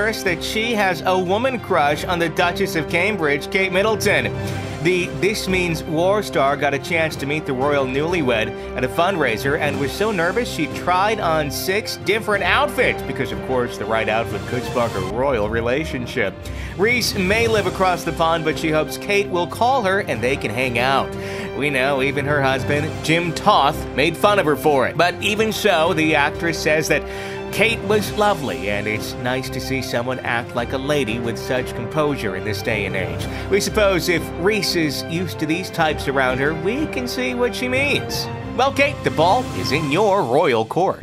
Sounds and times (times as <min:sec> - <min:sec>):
Music: 0:00.0 - 0:41.0
Speech: 0:00.0 - 0:41.0.